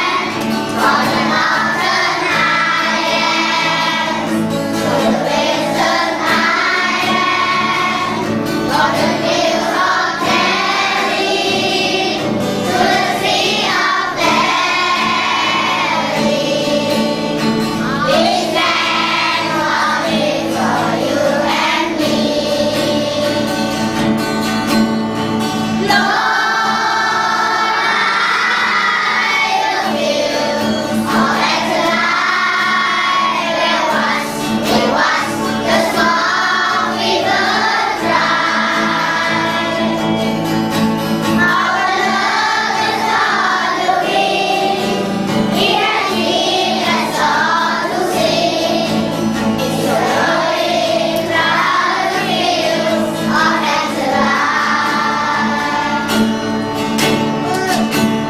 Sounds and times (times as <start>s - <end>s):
Child singing: 0.0s - 23.7s, 25.8s - 40.4s, 41.3s - 56.3s
Music: 0.0s - 58.2s.